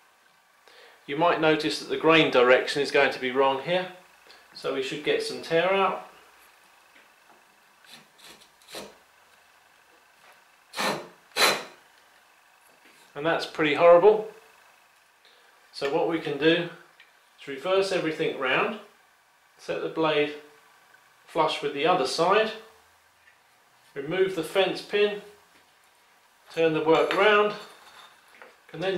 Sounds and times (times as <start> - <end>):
Speech: 1.1 - 4.0, 4.6 - 6.1, 13.2 - 14.3, 15.8 - 16.8, 17.4 - 18.9, 19.6 - 20.4, 21.3 - 22.7, 24.0 - 25.3, 26.5 - 27.6, 28.7 - 28.9.